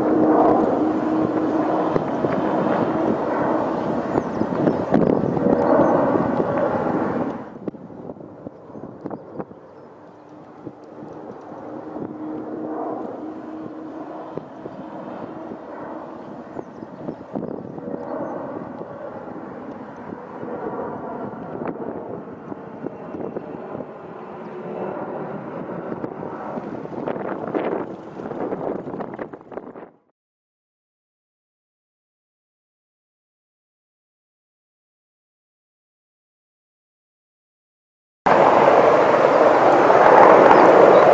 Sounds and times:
Wind noise (microphone): 0.0s - 9.8s, 10.4s - 12.3s, 13.0s - 24.2s, 25.0s - 30.1s
Fixed-wing aircraft, airplane: 0.0s - 30.1s, 38.3s - 41.1s.

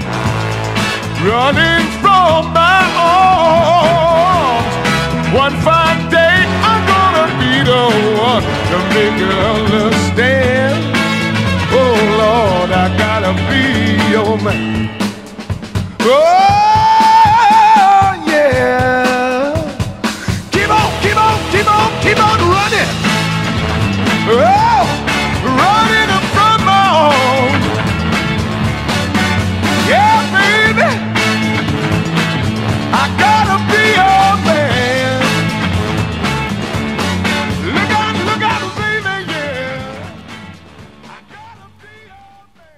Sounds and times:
Music: 0.0s - 42.7s.

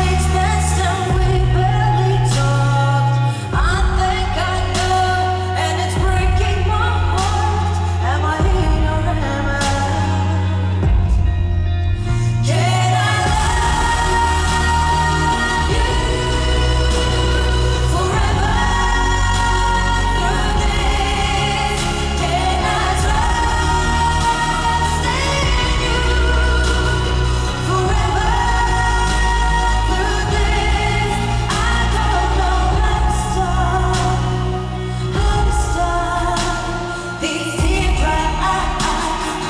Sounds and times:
Music: 0.0s - 39.5s.

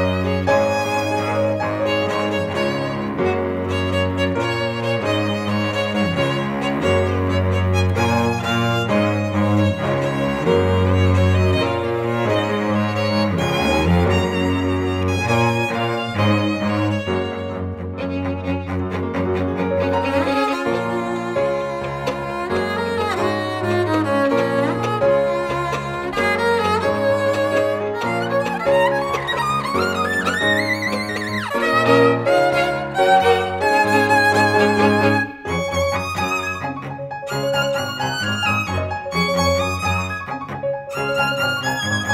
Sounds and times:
Cello: 0.0s - 42.1s
Orchestra: 0.0s - 42.1s
Piano: 0.0s - 42.1s
Violin, fiddle: 0.0s - 42.1s.

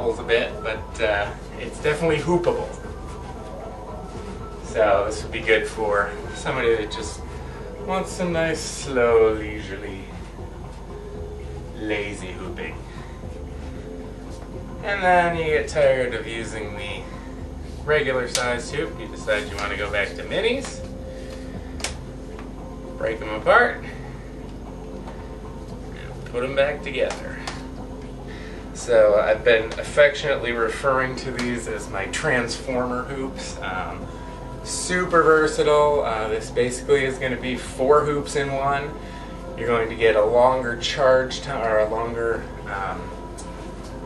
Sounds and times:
Speech: 0.0s - 2.8s, 4.7s - 10.2s, 11.8s - 12.8s, 14.8s - 17.0s, 17.9s - 20.9s, 23.0s - 23.9s, 26.0s - 27.4s, 28.8s - 34.0s, 34.7s - 39.0s, 39.6s - 43.2s
Music: 0.0s - 44.0s.

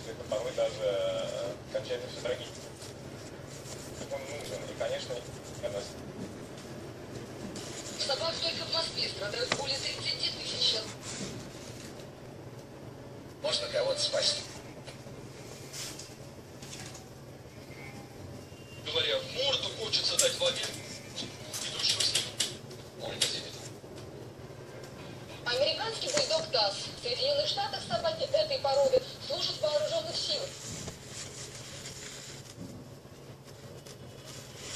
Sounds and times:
Inside, small room: 0.0s - 34.7s
Television: 0.0s - 34.7s.

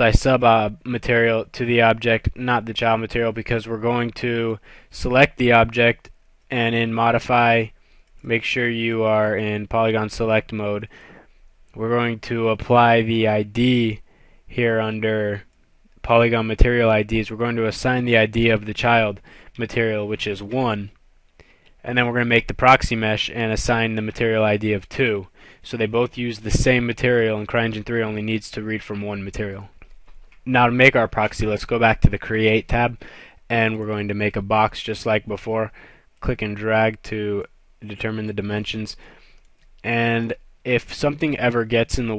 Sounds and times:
Speech: 0.0s - 10.9s, 11.8s - 21.0s, 21.8s - 29.8s, 30.4s - 39.0s, 39.8s - 42.1s.

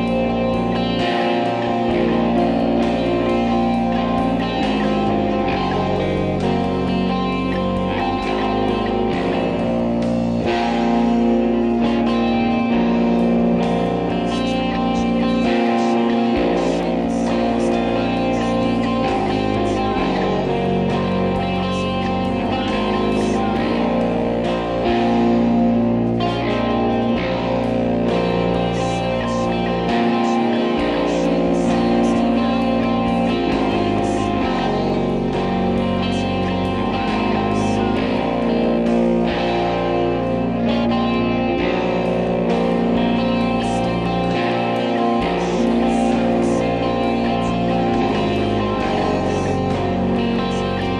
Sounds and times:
Electric guitar: 0.0s - 50.9s
Strum: 0.0s - 50.9s.

